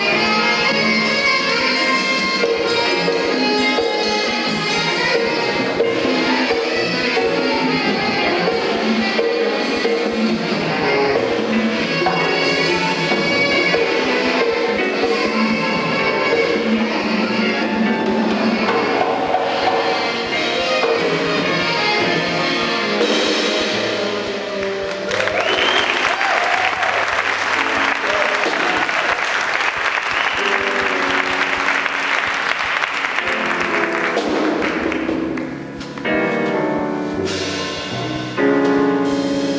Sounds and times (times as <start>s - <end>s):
Saxophone: 0.0s - 35.4s
Drum kit: 0.0s - 39.5s
Jazz: 0.0s - 39.5s
Orchestra: 0.0s - 39.5s.